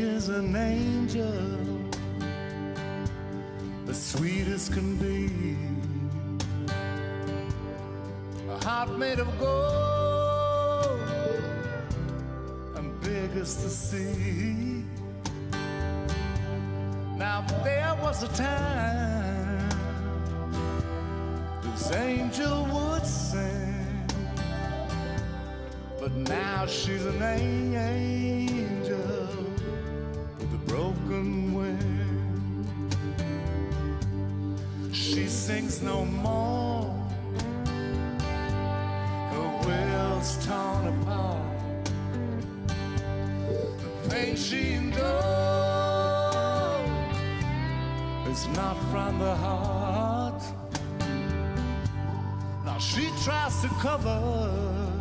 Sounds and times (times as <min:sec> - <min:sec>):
Music: 0:00.0 - 0:55.0.